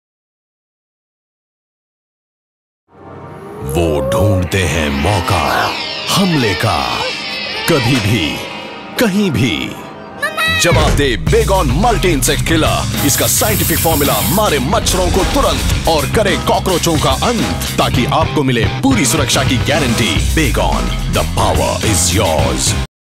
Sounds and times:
Music: 0:02.9 - 0:22.9
Speech: 0:03.6 - 0:22.9
Spray: 0:13.0 - 0:14.5.

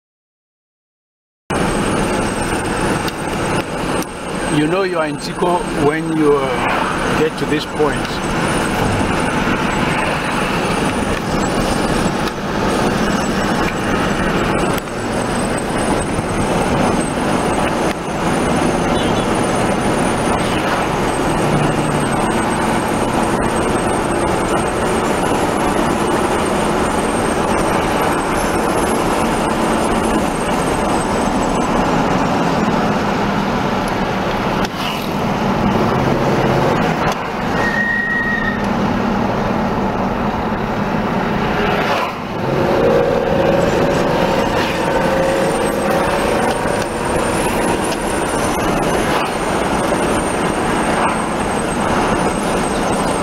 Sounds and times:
Car: 0:01.5 - 0:53.2
Speech: 0:04.5 - 0:08.2.

